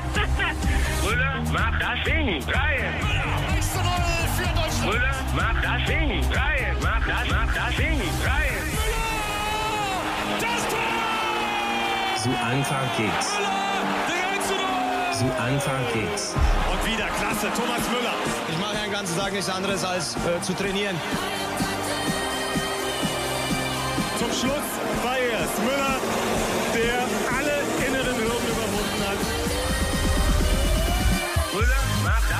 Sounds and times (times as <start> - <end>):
Music: 0.0 - 32.3.